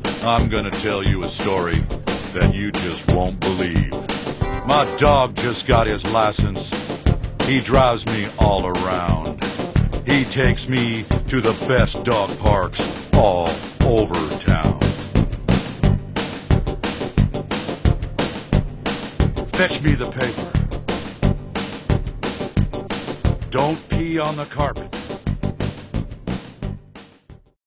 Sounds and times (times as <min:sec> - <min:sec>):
Music: 0:00.0 - 0:27.6
Speech: 0:00.2 - 0:04.1, 0:04.7 - 0:06.8, 0:07.4 - 0:15.0, 0:19.5 - 0:20.6, 0:23.5 - 0:24.9.